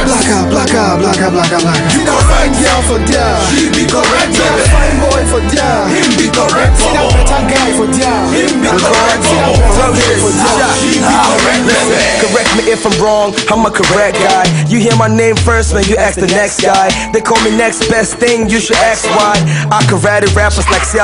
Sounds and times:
Pop music: 0.0 - 21.0.

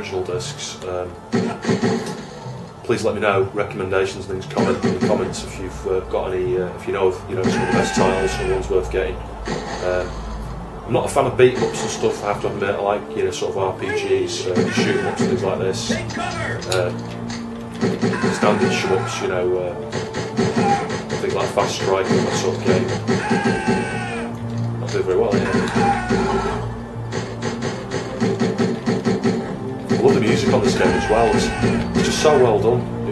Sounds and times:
Speech: 0.0 - 1.2, 2.9 - 9.2, 9.8 - 10.1, 10.9 - 17.0, 18.2 - 19.8, 21.2 - 23.0, 24.8 - 25.7, 30.0 - 33.1
Music: 0.0 - 33.1.

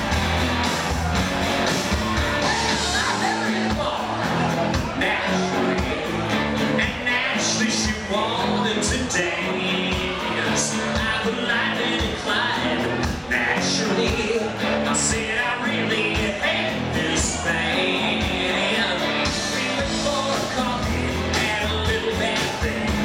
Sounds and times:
Acoustic guitar: 0.0 - 23.0.

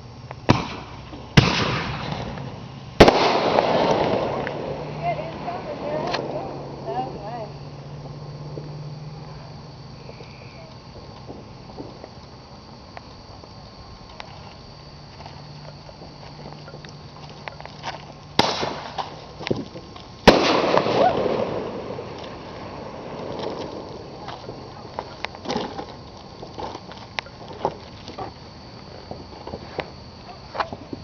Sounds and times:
Outside, rural or natural: 0.0 - 31.0
Fireworks: 0.4 - 12.3, 15.8 - 27.8.

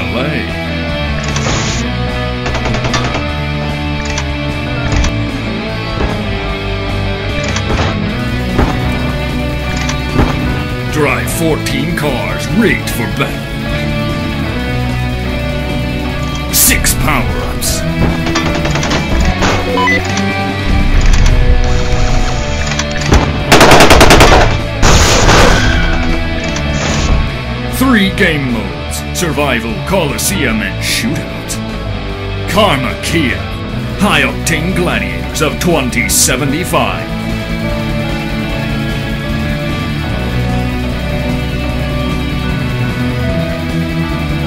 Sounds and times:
Machine gun: 23.5 - 25.3.

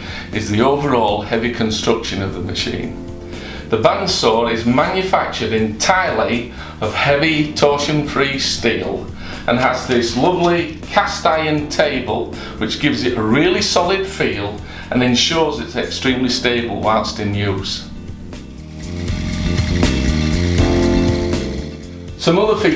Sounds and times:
Music: 0.0 - 22.7
Speech: 0.3 - 3.0, 3.7 - 17.9, 22.2 - 22.7.

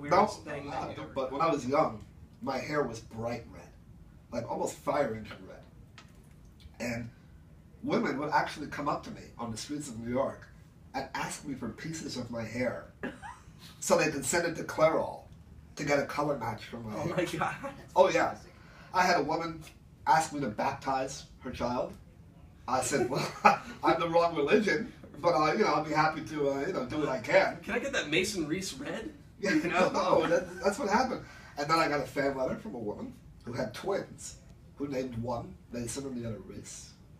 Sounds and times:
Speech: 7.8 - 12.9, 13.8 - 37.0.

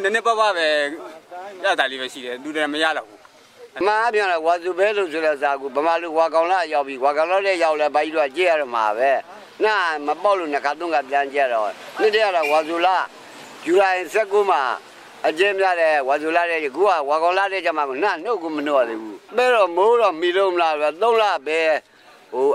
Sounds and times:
Speech: 0.0 - 22.5.

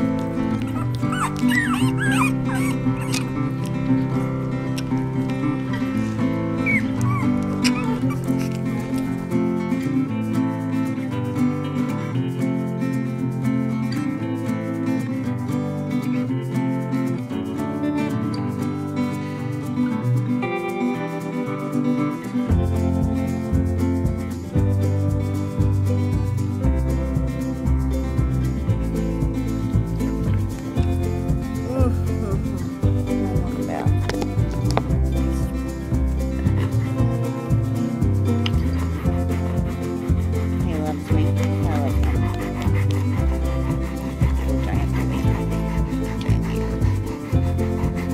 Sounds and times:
Music: 0.0 - 48.1.

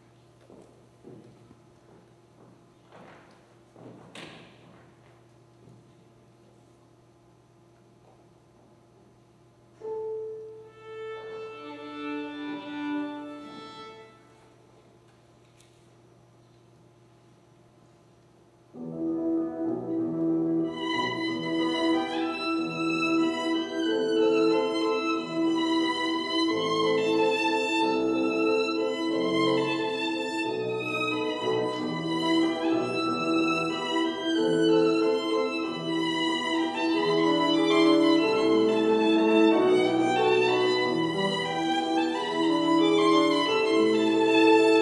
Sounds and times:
Violin, fiddle: 10.6 - 14.5, 20.6 - 44.8.

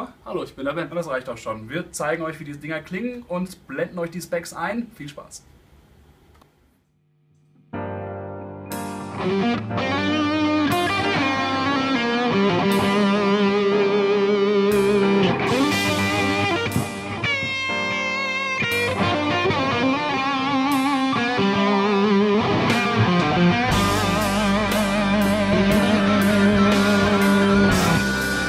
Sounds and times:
Speech: 0.0 - 5.5
Music: 7.4 - 28.4.

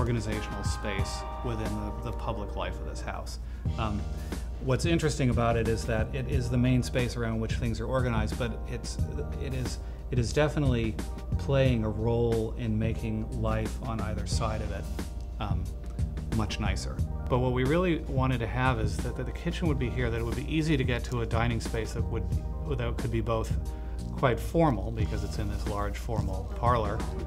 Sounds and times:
Speech: 0.0 - 14.8, 15.4 - 15.7, 16.3 - 27.2
Music: 0.0 - 27.2.

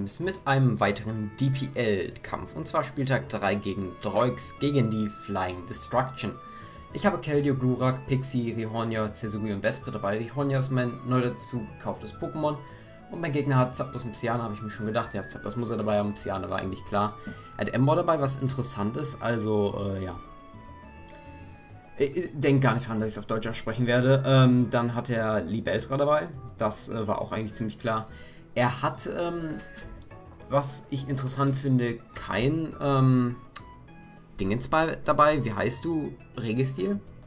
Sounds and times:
Speech: 0.0 - 20.2, 22.0 - 29.7, 30.5 - 33.4, 34.4 - 37.0
Music: 0.0 - 37.2.

